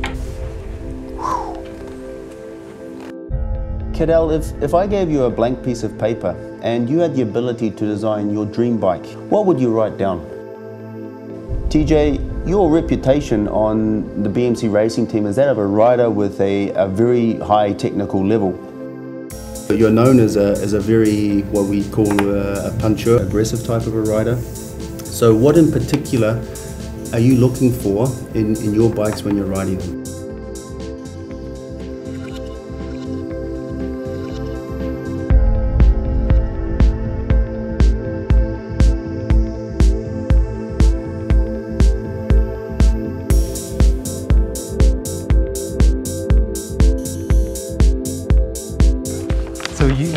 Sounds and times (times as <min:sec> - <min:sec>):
Music: 0:00.0 - 0:50.1
Speech: 0:03.9 - 0:10.3, 0:11.7 - 0:18.6, 0:19.7 - 0:24.4, 0:25.1 - 0:26.5, 0:27.1 - 0:30.0, 0:49.7 - 0:50.1.